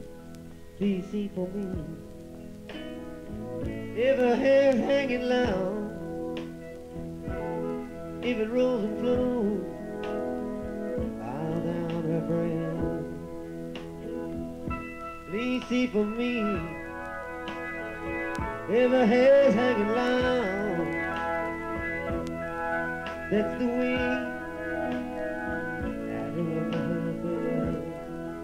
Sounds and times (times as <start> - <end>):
Singing: 26.2 - 28.4.